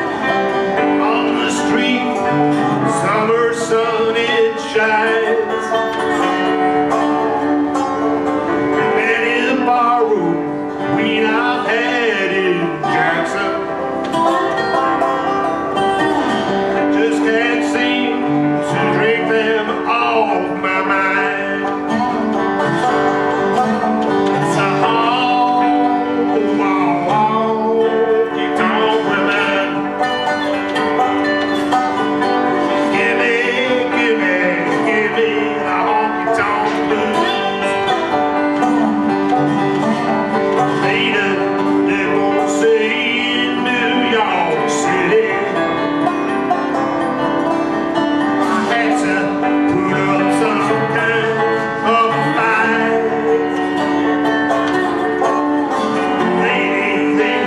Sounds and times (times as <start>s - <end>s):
Country: 0.0s - 57.4s.